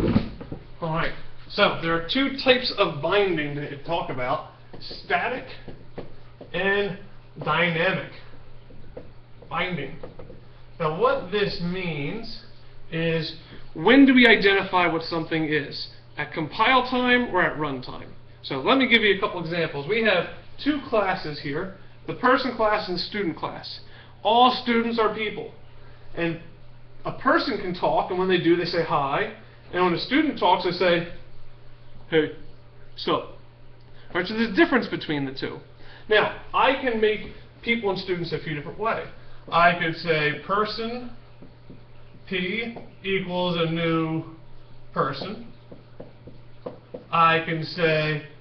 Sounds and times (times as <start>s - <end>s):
Speech: 0.8s - 5.7s, 6.5s - 8.3s, 9.5s - 10.0s, 10.8s - 25.6s, 26.2s - 31.2s, 32.1s - 33.4s, 34.1s - 41.2s, 42.2s - 45.6s, 47.1s - 48.4s.